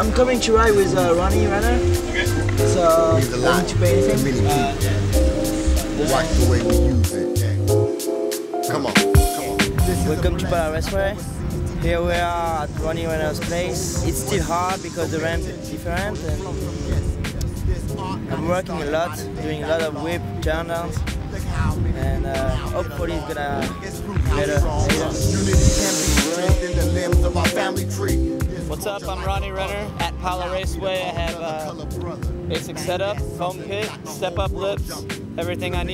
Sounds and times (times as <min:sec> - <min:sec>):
Speech: 0:00.0 - 0:05.0, 0:06.0 - 0:07.6, 0:08.7 - 0:35.9
Music: 0:00.0 - 0:35.9.